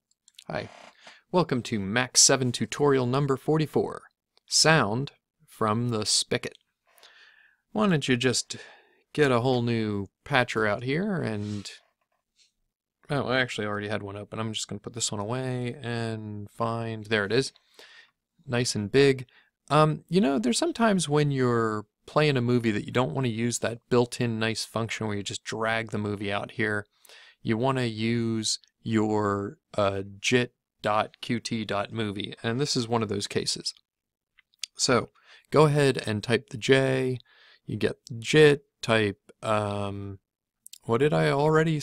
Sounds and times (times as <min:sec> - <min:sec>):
Speech: 0:00.4 - 0:06.6, 0:07.7 - 0:11.8, 0:13.0 - 0:17.6, 0:18.5 - 0:33.8, 0:34.6 - 0:41.8.